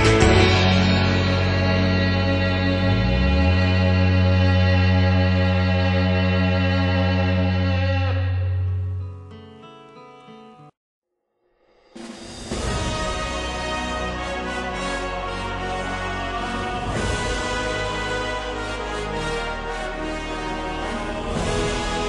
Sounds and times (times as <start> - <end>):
Music: 0.0 - 22.0.